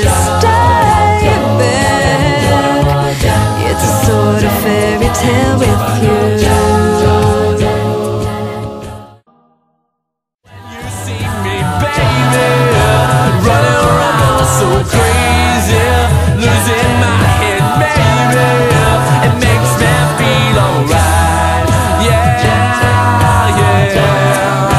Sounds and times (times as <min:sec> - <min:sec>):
Independent music: 0:00.0 - 0:09.2, 0:10.5 - 0:24.7.